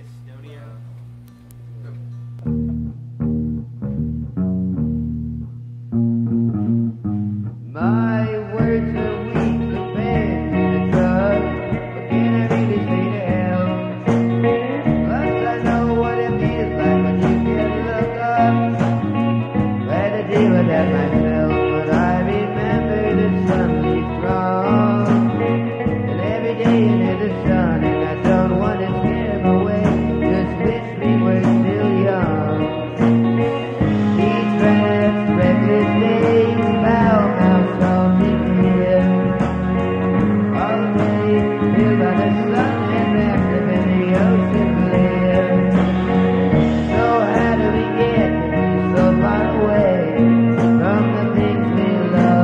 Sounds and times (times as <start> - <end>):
Music: 0.0 - 52.4.